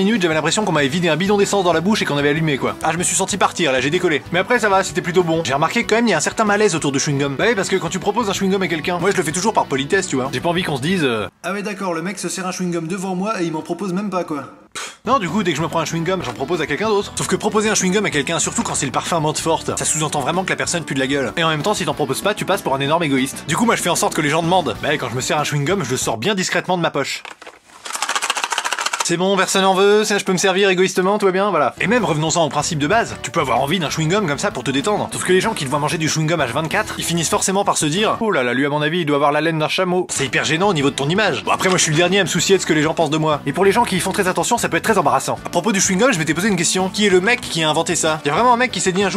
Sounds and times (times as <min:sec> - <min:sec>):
Music: 0:00.0 - 0:11.4, 0:15.0 - 0:26.6, 0:27.8 - 0:49.1
Speech: 0:00.0 - 0:27.3, 0:29.0 - 0:49.1.